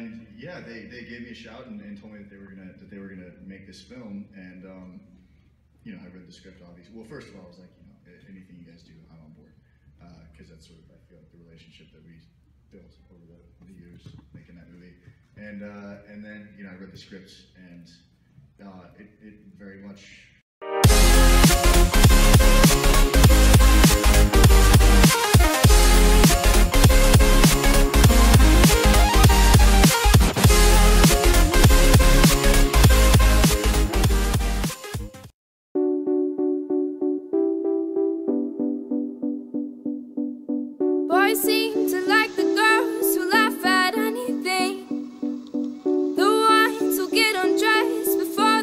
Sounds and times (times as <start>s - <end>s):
Synthesizer: 20.6s - 48.6s.